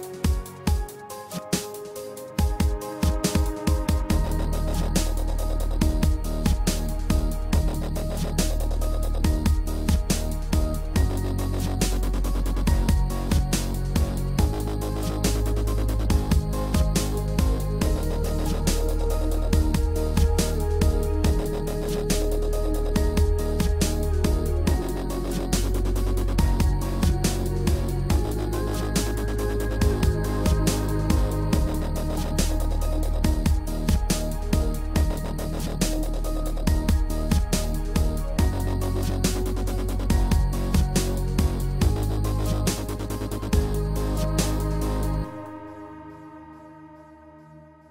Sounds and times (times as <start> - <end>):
Music: 0.0 - 47.9.